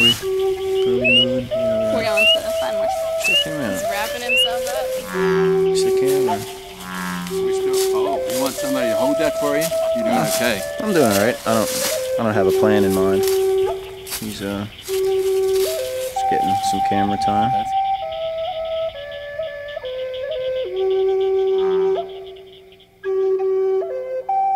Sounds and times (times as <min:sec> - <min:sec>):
Music: 0:00.0 - 0:24.5
Outside, rural or natural: 0:00.0 - 0:24.5
Speech: 0:00.9 - 0:04.9, 0:05.7 - 0:06.5, 0:07.4 - 0:13.3, 0:14.2 - 0:14.7, 0:16.2 - 0:17.7.